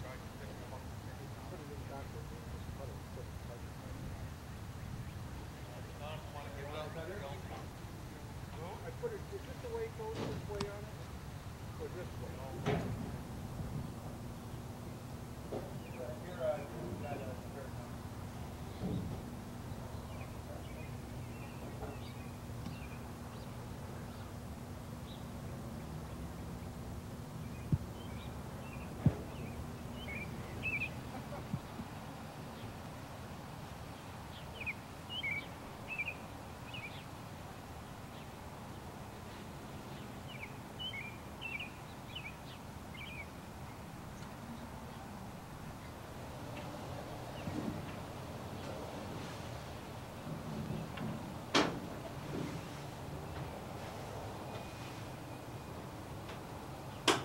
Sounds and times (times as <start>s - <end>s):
Speech: 0.0s - 4.2s, 5.6s - 11.0s, 11.7s - 13.0s, 15.9s - 18.0s.